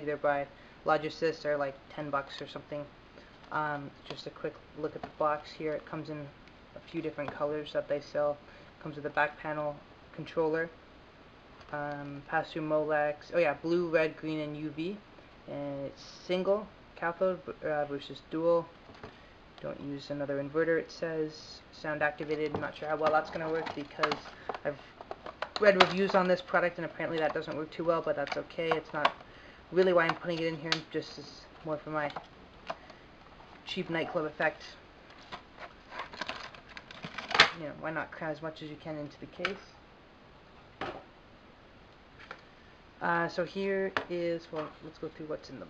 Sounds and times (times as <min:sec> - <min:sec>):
Speech: 0:00.0 - 0:02.9, 0:03.5 - 0:10.8, 0:11.7 - 0:18.8, 0:19.6 - 0:24.9, 0:25.6 - 0:32.2, 0:33.7 - 0:34.8, 0:37.5 - 0:39.7, 0:43.0 - 0:45.7.